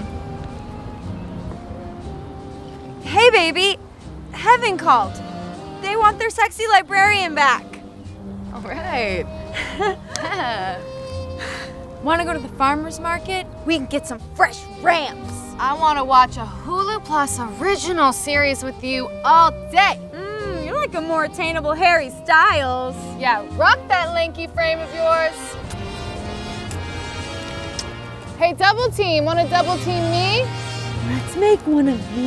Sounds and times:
Music: 0:00.0 - 0:32.2.

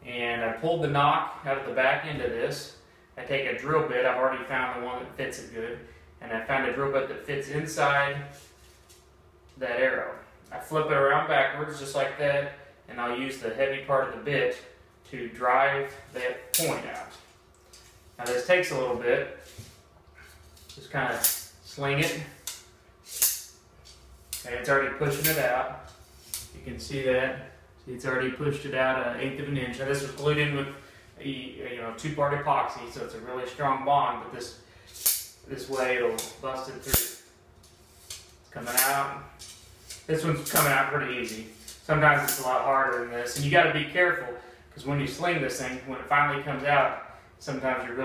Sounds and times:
Speech: 0:00.0 - 0:08.4, 0:09.6 - 0:17.2, 0:18.2 - 0:19.4, 0:20.8 - 0:22.4, 0:24.4 - 0:25.8, 0:26.6 - 0:34.6, 0:35.5 - 0:37.2, 0:38.5 - 0:39.3, 0:40.1 - 0:48.0.

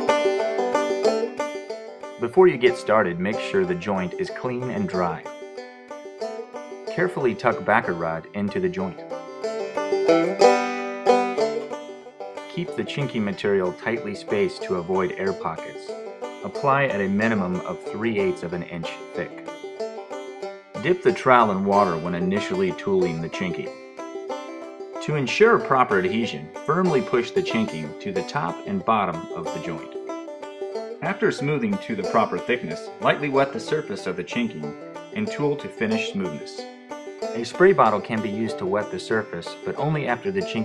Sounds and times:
Music: 0:00.0 - 0:40.6
Speech: 0:02.2 - 0:05.3, 0:06.9 - 0:09.0, 0:12.5 - 0:19.4, 0:20.8 - 0:23.7, 0:25.0 - 0:30.0, 0:31.0 - 0:36.6, 0:37.4 - 0:40.6.

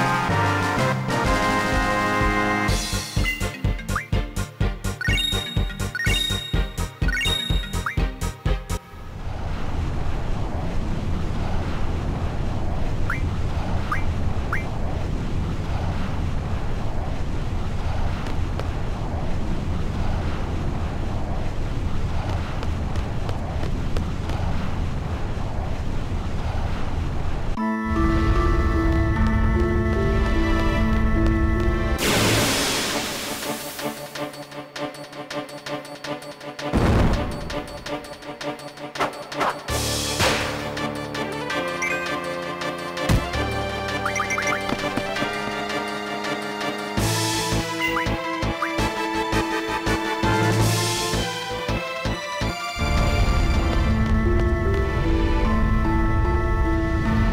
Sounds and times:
Eruption: 0:08.9 - 0:34.3, 0:36.7 - 0:38.0, 0:49.4 - 0:57.3.

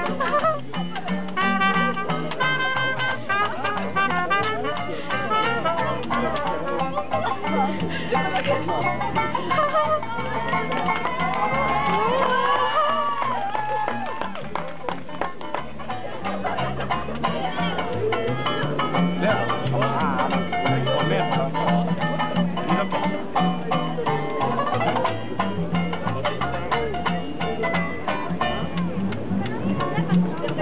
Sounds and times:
Folk music: 0:00.0 - 0:30.6
Speech: 0:00.0 - 0:30.6.

